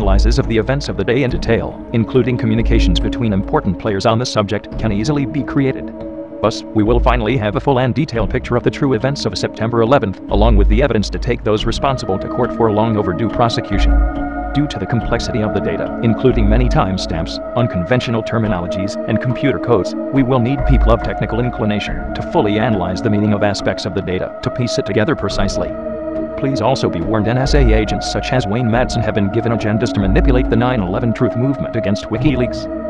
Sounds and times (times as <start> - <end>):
Speech: 0.0 - 14.0, 14.6 - 25.8, 26.4 - 32.7
Music: 0.0 - 32.9.